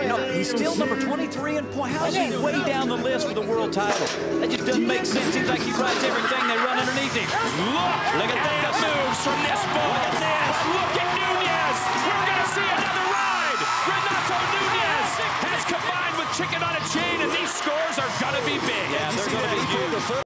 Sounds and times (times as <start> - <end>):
Speech: 0.0 - 20.2.